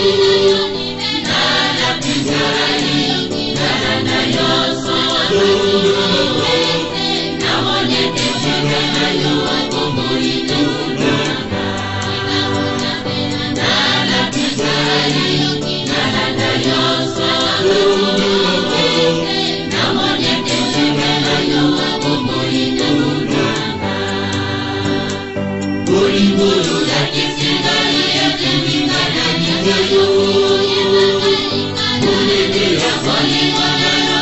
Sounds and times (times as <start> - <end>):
Chant: 0.0 - 34.2.